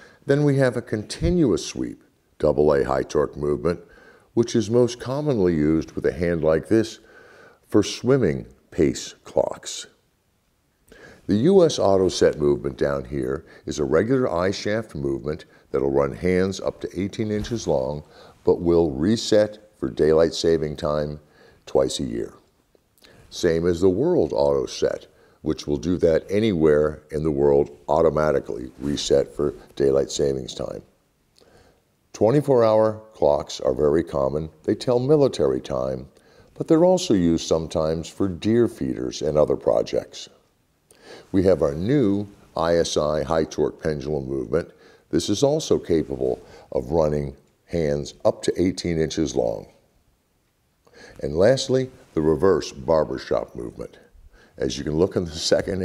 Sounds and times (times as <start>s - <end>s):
Speech: 0.0s - 7.1s, 7.7s - 10.0s, 11.2s - 22.5s, 23.1s - 31.0s, 32.1s - 40.4s, 41.3s - 49.9s, 51.2s - 55.8s.